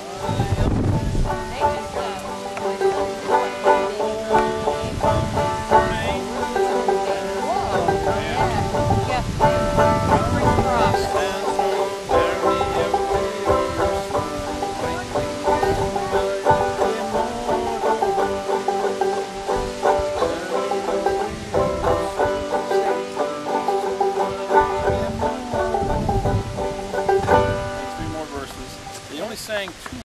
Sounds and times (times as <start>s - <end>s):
Music: 0.0s - 29.2s
Speech: 0.1s - 2.9s, 3.8s - 9.3s, 10.1s - 13.1s, 27.9s - 30.0s.